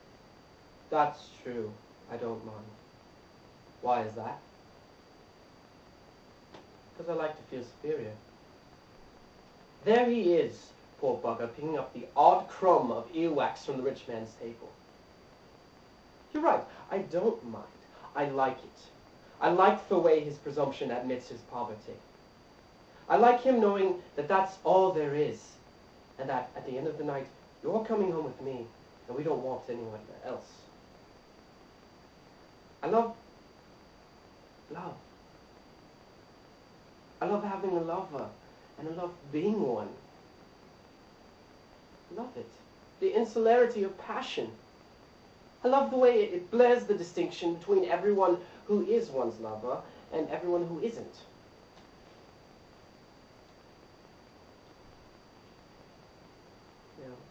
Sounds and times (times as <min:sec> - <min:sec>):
Speech: 0:00.9 - 0:02.8, 0:03.8 - 0:04.5, 0:07.0 - 0:08.2, 0:09.8 - 0:14.8, 0:16.3 - 0:22.0, 0:23.1 - 0:25.6, 0:26.2 - 0:30.7, 0:32.8 - 0:33.2, 0:34.7 - 0:35.0, 0:37.2 - 0:40.0, 0:42.1 - 0:44.6, 0:45.6 - 0:51.3, 0:57.0 - 0:57.3.